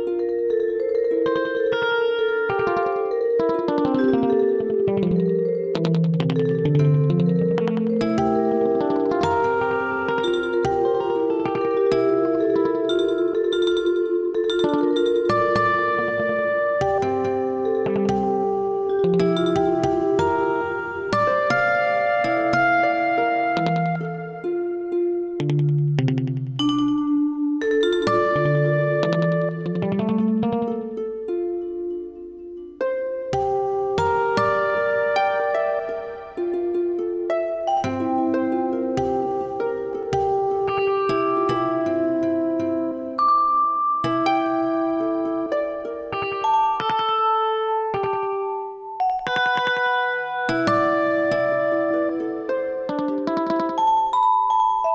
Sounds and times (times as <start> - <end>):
Musical instrument: 0.0 - 54.9.